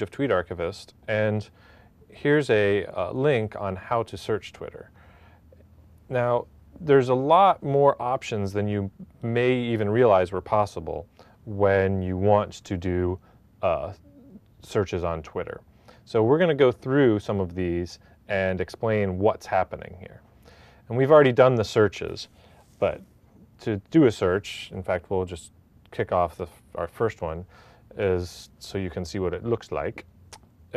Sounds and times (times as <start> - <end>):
Speech: 0.0 - 4.9, 6.1 - 20.2, 20.9 - 30.1.